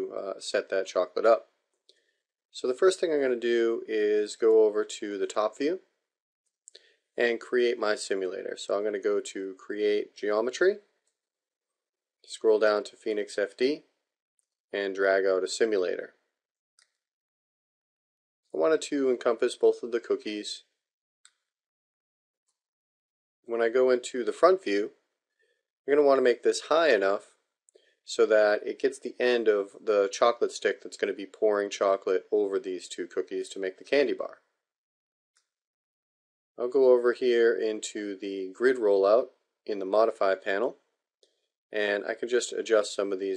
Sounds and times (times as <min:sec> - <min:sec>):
Speech: 0:00.0 - 0:01.5, 0:02.6 - 0:05.9, 0:07.2 - 0:10.8, 0:12.3 - 0:13.9, 0:14.8 - 0:16.2, 0:18.6 - 0:20.7, 0:23.5 - 0:24.9, 0:25.9 - 0:27.3, 0:28.1 - 0:34.4, 0:36.6 - 0:40.8, 0:41.8 - 0:43.3.